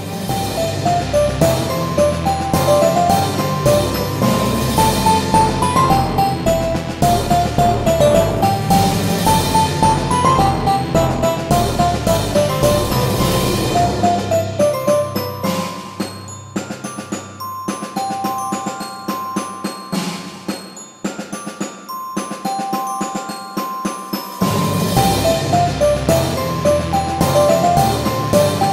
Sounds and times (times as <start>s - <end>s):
Music: 0.0s - 28.7s.